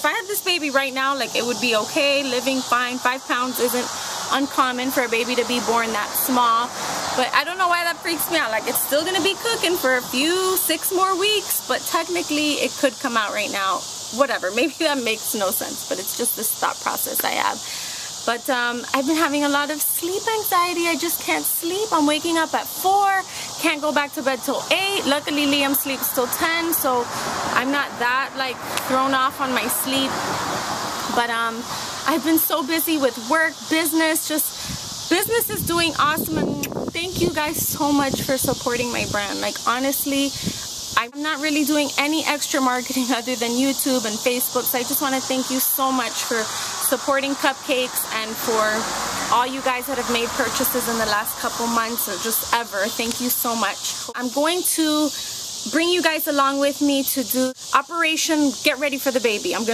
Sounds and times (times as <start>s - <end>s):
Speech: 0.0s - 30.2s, 31.1s - 59.7s.